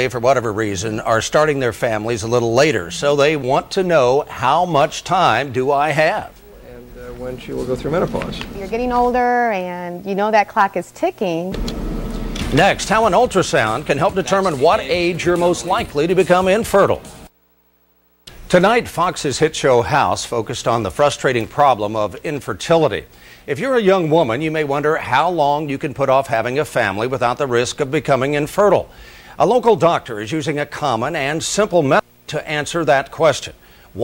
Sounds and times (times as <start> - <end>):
Speech: 0.0 - 11.6, 12.6 - 17.0, 18.5 - 34.0
Music: 11.6 - 17.3.